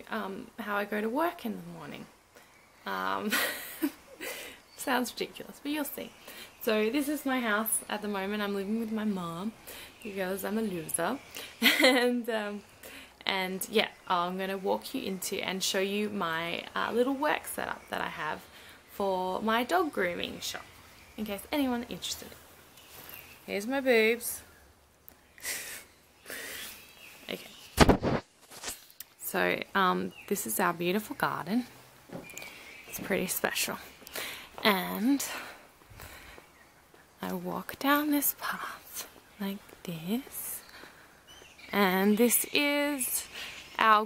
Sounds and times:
Speech: 0:00.0 - 0:02.1, 0:04.8 - 0:11.2, 0:13.2 - 0:20.6, 0:21.2 - 0:22.4, 0:23.5 - 0:24.4, 0:29.2 - 0:31.7, 0:33.0 - 0:33.9, 0:34.6 - 0:35.3, 0:37.2 - 0:40.6, 0:41.7 - 0:44.0.

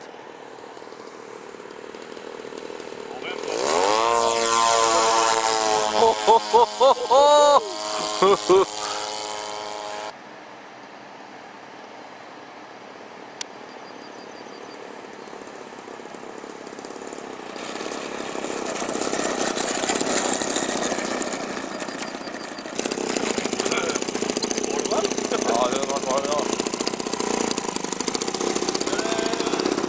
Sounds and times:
Wind: 0:00.0 - 0:29.8.

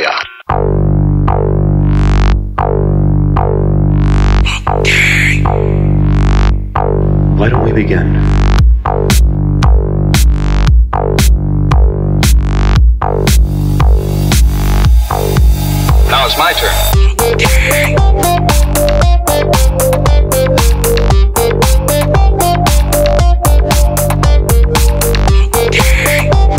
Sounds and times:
Speech: 0:00.0 - 0:00.4, 0:07.4 - 0:08.3, 0:16.1 - 0:16.9
Music: 0:00.5 - 0:26.5.

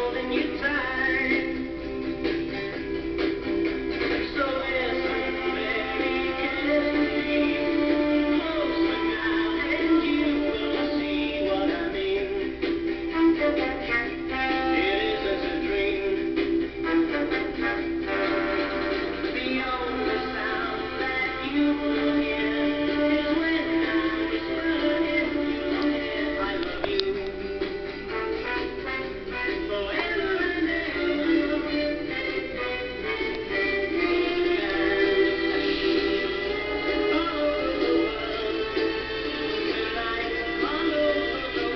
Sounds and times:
Music: 0:00.0 - 0:41.7.

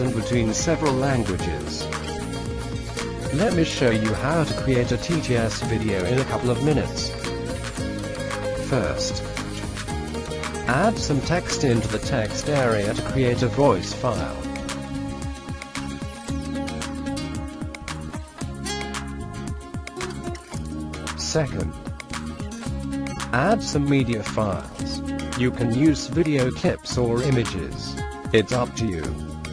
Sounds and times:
Male speech, man speaking: 0:00.0 - 0:01.9, 0:03.3 - 0:07.2, 0:08.6 - 0:09.2, 0:10.7 - 0:14.5, 0:21.2 - 0:21.8, 0:23.3 - 0:29.2
Music: 0:00.0 - 0:29.5
Narration, monologue: 0:00.0 - 0:29.5.

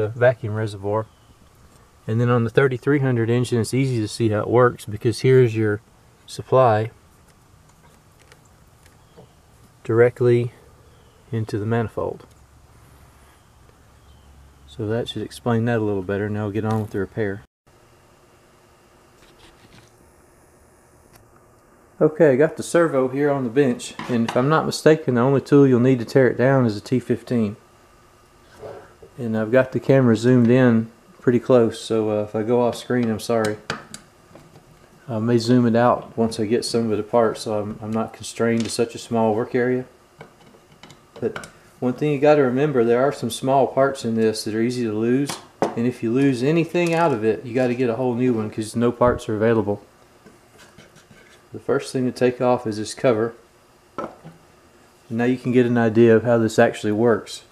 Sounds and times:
Speech: 0:00.0 - 0:01.1, 0:02.1 - 0:07.0, 0:09.8 - 0:10.6, 0:11.3 - 0:12.3, 0:14.7 - 0:17.5, 0:22.0 - 0:27.6, 0:29.2 - 0:33.7, 0:35.1 - 0:40.0, 0:41.2 - 0:49.9, 0:51.6 - 0:53.4, 0:55.1 - 0:57.5.

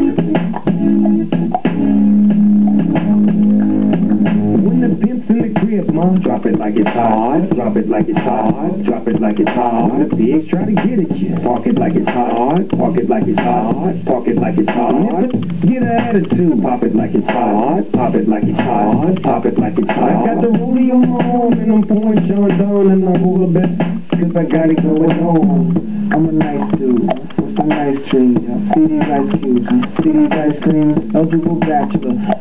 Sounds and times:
Beatboxing: 0:00.0 - 0:32.4.

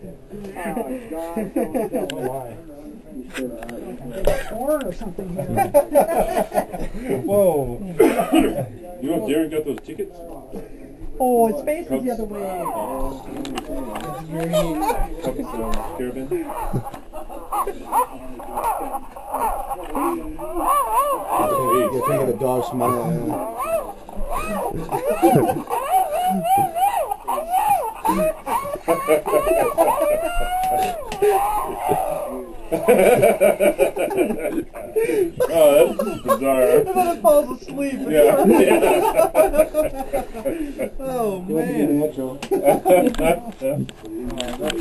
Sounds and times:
Whimper (dog): 0:16.5 - 0:32.4.

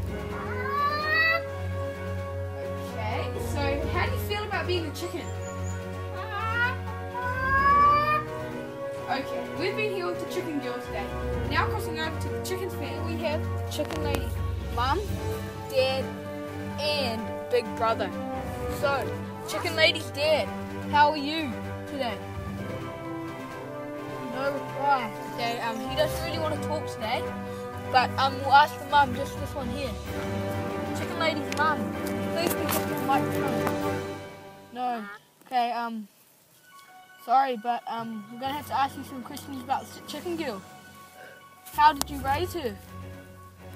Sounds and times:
Music: 0:00.0 - 0:43.7
Speech: 0:18.8 - 0:22.2, 0:24.2 - 0:27.2, 0:27.9 - 0:30.0, 0:31.0 - 0:33.7, 0:37.2 - 0:40.6, 0:41.7 - 0:42.8.

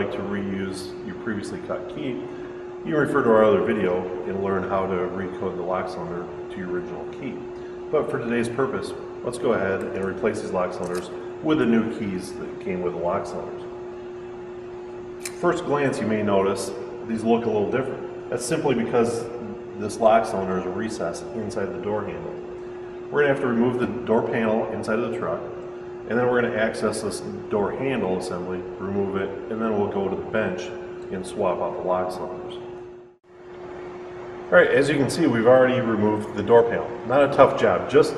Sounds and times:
Speech: 0:00.0 - 0:13.7, 0:15.3 - 0:22.5, 0:23.1 - 0:32.7, 0:34.5 - 0:38.1.

